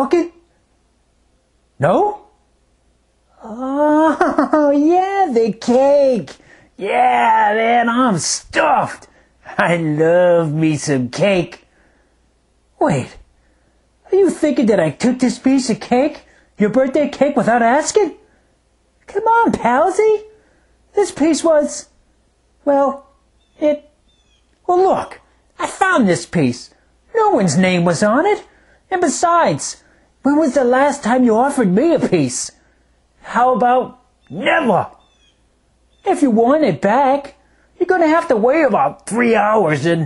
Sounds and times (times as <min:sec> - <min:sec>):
Speech: 0:00.0 - 0:00.5, 0:01.8 - 0:02.4, 0:03.3 - 0:11.7, 0:12.8 - 0:13.3, 0:14.1 - 0:18.3, 0:19.0 - 0:22.0, 0:22.6 - 0:24.0, 0:24.6 - 0:32.6, 0:33.2 - 0:35.0, 0:36.0 - 0:40.0.